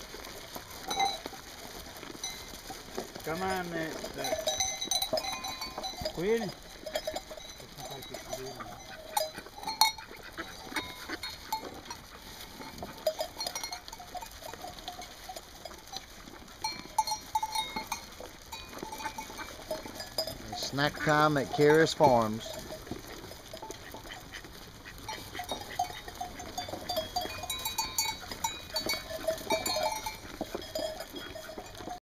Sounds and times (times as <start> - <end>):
Speech: 20.5 - 22.5.